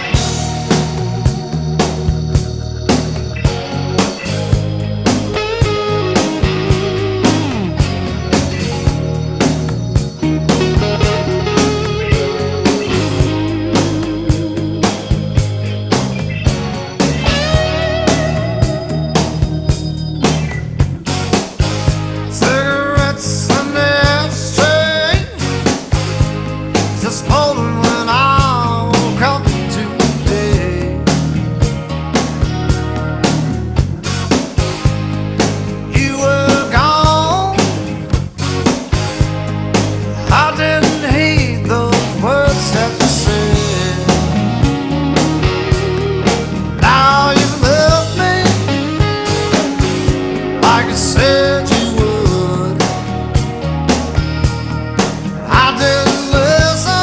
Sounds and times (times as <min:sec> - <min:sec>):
Music: 0:00.0 - 0:57.0.